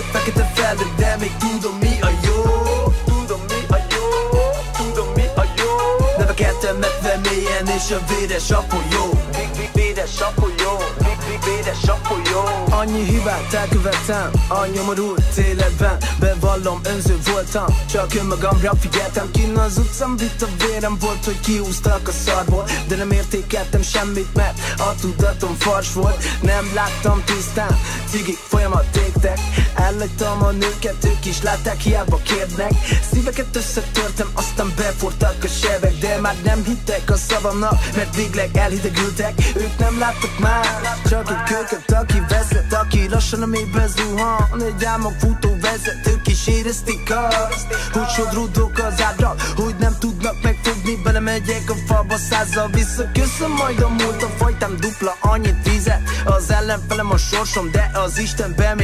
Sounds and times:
Dance music: 0.0s - 58.8s
Pop music: 0.0s - 58.8s.

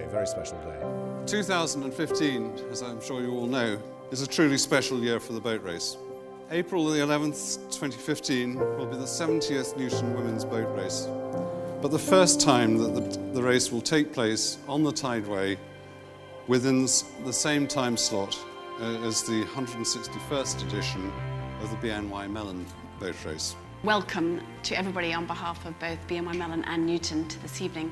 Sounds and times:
Speech: 0.0s - 11.1s, 11.8s - 15.6s
Music: 0.0s - 27.9s.

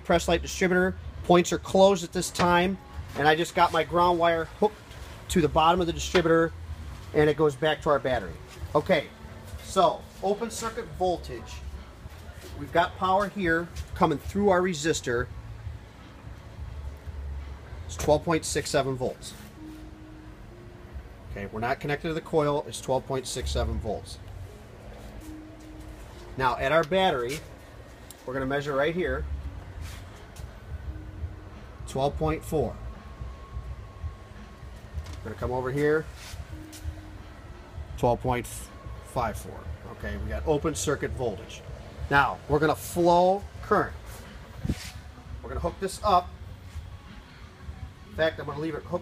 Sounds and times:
Speech: 0.0s - 6.5s, 7.1s - 11.7s, 12.4s - 15.3s, 17.9s - 19.4s, 21.3s - 24.2s, 26.4s - 27.4s, 28.3s - 29.3s, 31.9s - 32.8s, 35.2s - 36.1s, 38.0s - 44.0s, 45.4s - 46.3s, 48.1s - 49.0s.

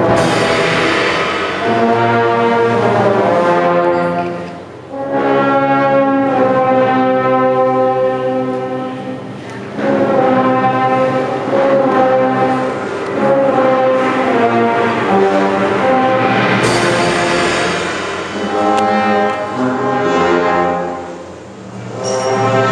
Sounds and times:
Music: 0.0s - 22.7s.

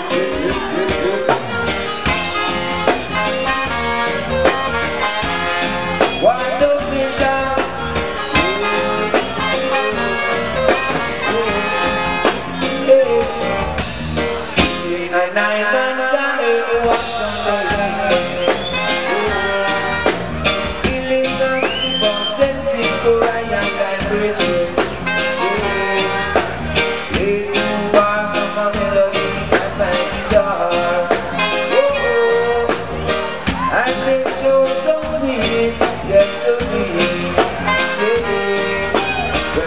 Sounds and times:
Music: 0.0s - 39.6s.

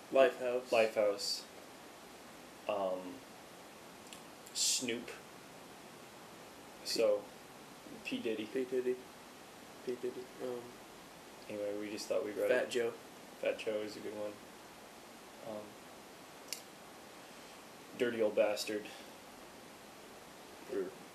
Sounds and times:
Speech: 0.1s - 1.5s, 2.7s - 3.2s, 4.5s - 5.2s, 6.8s - 7.3s, 7.9s - 9.0s, 9.9s - 10.8s, 11.5s - 14.4s, 15.4s - 15.8s, 18.0s - 19.1s, 20.7s - 21.0s.

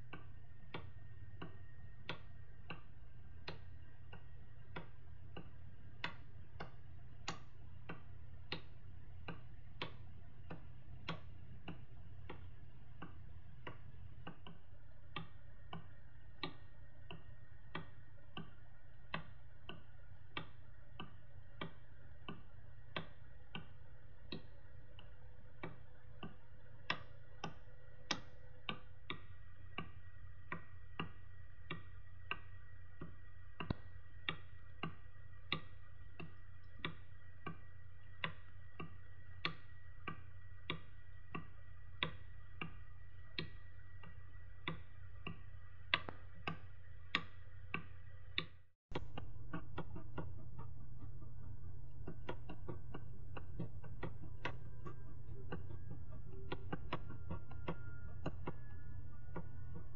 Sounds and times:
Tick-tock: 0.0s - 59.9s.

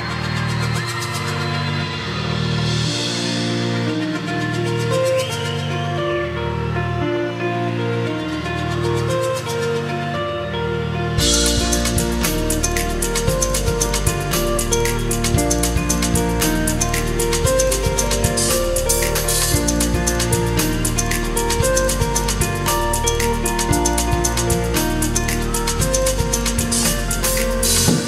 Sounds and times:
Music: 0.0s - 28.0s.

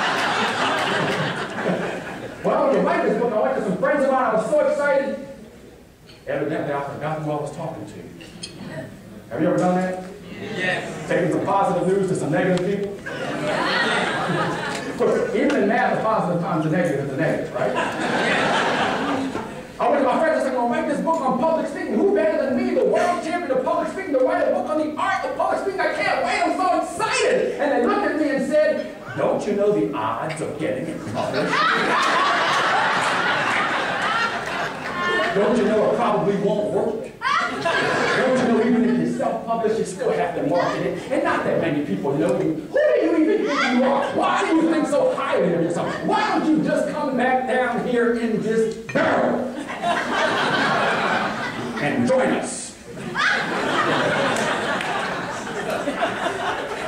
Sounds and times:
Conversation: 0.0s - 56.8s
Male speech, man speaking: 2.4s - 5.4s, 6.2s - 8.2s, 9.3s - 13.0s, 15.0s - 17.8s, 19.8s - 31.5s, 35.3s - 37.1s, 38.0s - 49.5s, 51.8s - 52.8s.

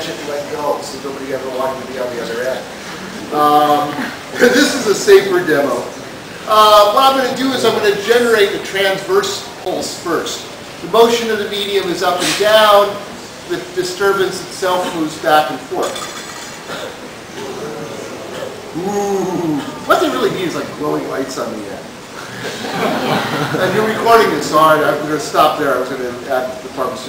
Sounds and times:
Speech: 0.0s - 2.7s, 3.3s - 16.0s, 18.8s - 21.9s, 23.5s - 27.0s.

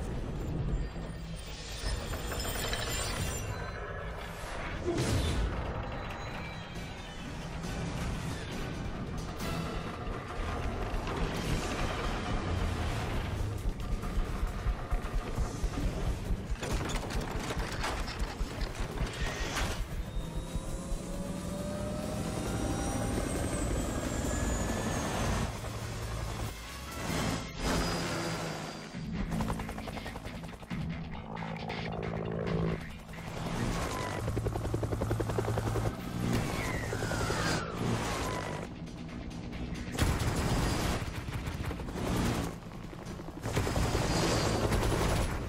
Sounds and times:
Rumble: 0.0s - 28.2s, 28.8s - 45.4s
Sound effect: 0.0s - 29.3s, 36.1s - 42.6s.

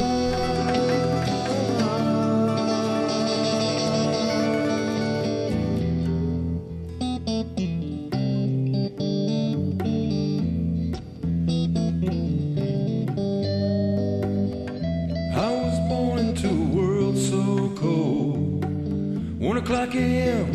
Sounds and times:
Distortion: 0.0s - 20.5s
Effects unit: 0.0s - 20.5s
Music: 0.0s - 20.5s.

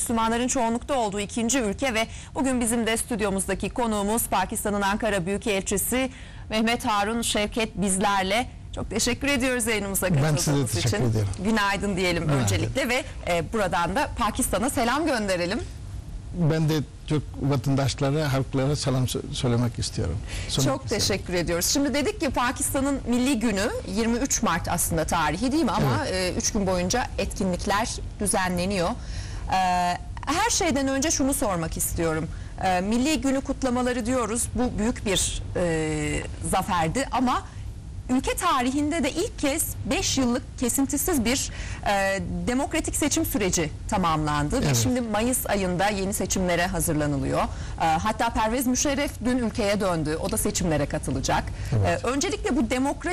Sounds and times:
Speech: 9.8s - 13.5s, 23.3s - 28.0s, 42.0s - 46.6s, 47.3s - 53.1s.

